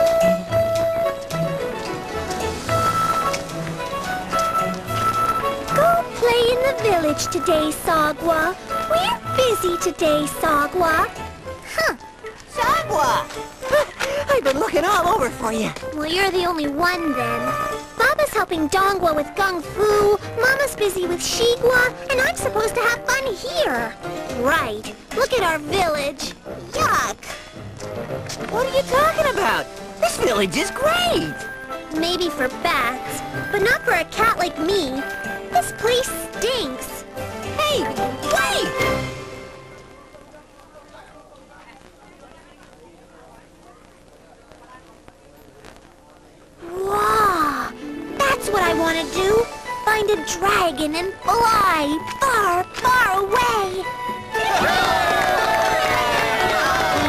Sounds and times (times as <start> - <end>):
Music: 0.0 - 43.8, 46.6 - 57.0.